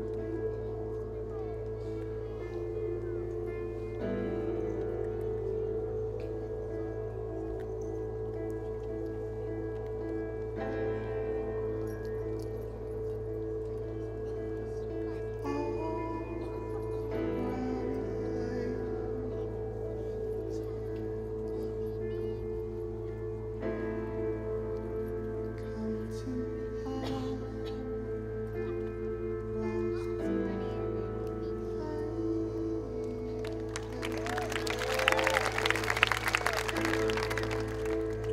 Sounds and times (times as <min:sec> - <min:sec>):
Music: 0:00.0 - 0:38.3
Speech: 0:00.1 - 0:07.3, 0:13.8 - 0:34.1.